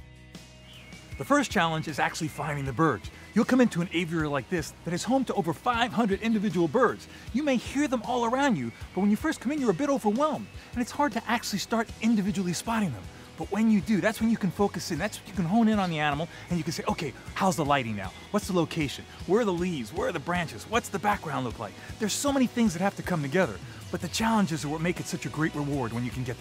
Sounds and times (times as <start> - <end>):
Music: 0.0 - 26.4
Speech: 1.2 - 26.4.